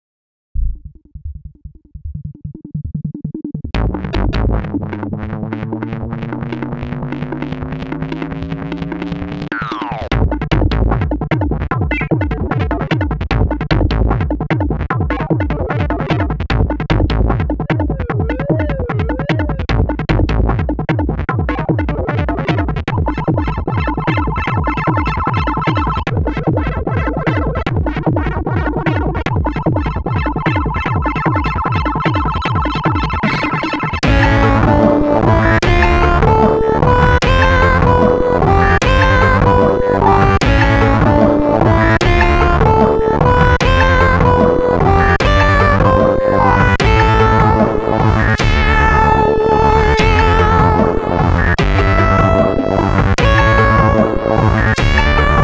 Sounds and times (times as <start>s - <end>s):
Music: 0.6s - 55.4s.